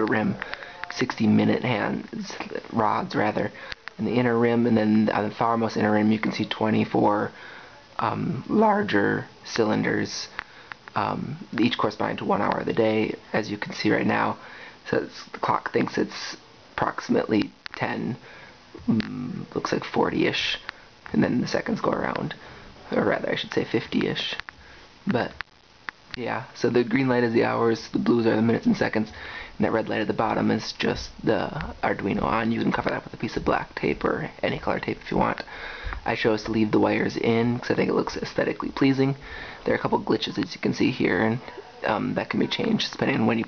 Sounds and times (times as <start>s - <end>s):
Speech: 0.0s - 18.2s, 18.8s - 25.4s, 26.2s - 43.4s.